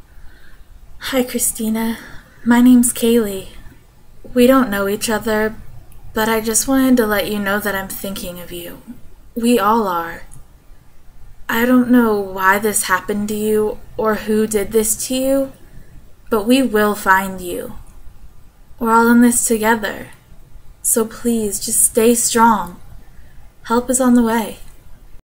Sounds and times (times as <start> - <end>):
Speech: 1.0 - 3.7, 4.3 - 5.6, 6.2 - 10.4, 11.5 - 15.6, 16.3 - 17.8, 18.8 - 20.2, 20.8 - 22.8, 23.7 - 24.8.